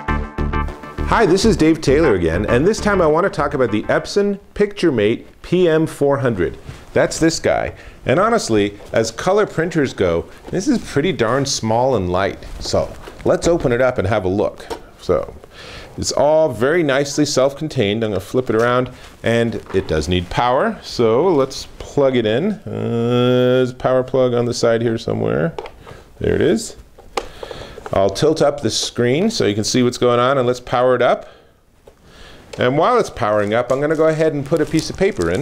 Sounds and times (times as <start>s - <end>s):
Speech: 1.1s - 15.4s, 16.0s - 25.6s, 26.2s - 26.8s, 27.9s - 31.3s, 32.6s - 35.4s.